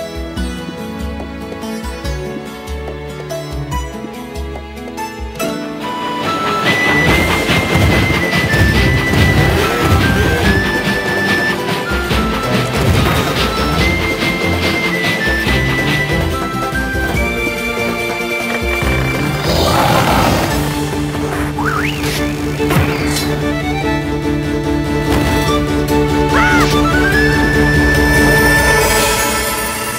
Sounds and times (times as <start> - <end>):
Video game music: 0.0 - 29.9.